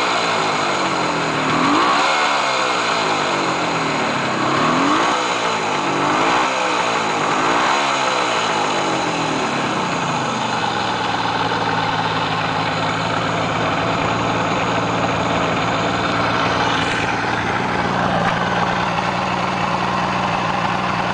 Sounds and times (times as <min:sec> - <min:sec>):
Motorcycle: 0:00.0 - 0:21.1.